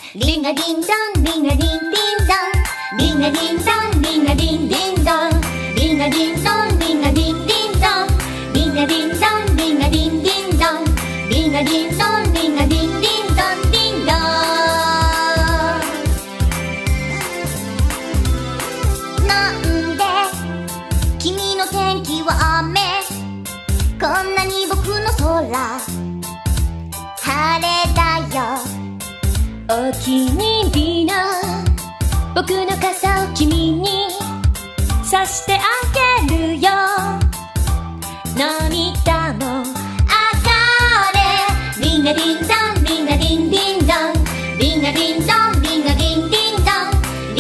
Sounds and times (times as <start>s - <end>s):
Music: 0.0s - 47.4s.